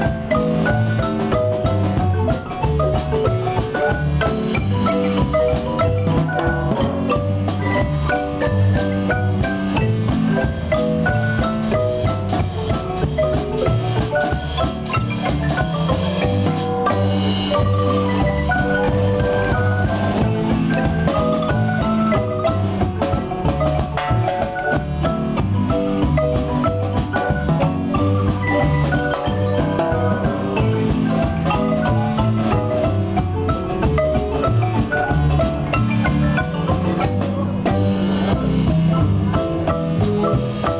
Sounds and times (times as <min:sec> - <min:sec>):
Drum: 0:00.0 - 0:40.7
Drum kit: 0:00.0 - 0:40.7
Marimba, xylophone: 0:00.0 - 0:40.7.